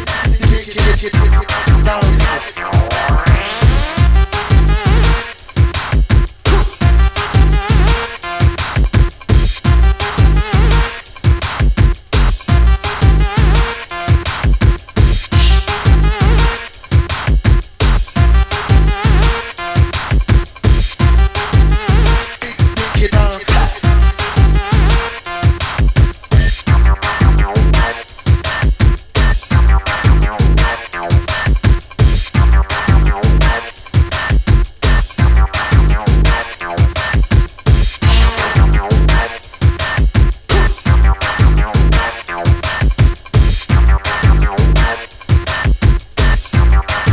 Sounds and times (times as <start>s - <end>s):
Soundtrack music: 0.0s - 8.8s, 9.7s - 11.6s, 15.3s - 17.1s, 18.2s - 20.2s, 21.0s - 28.7s, 32.4s - 34.4s, 35.2s - 47.1s
Drum and bass: 0.0s - 47.1s.